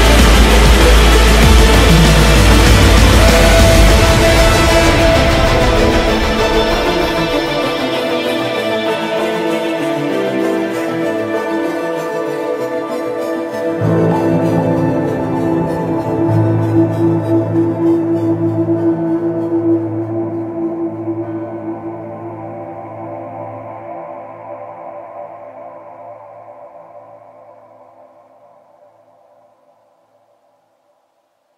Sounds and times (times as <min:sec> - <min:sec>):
Music: 0:00.0 - 0:30.5.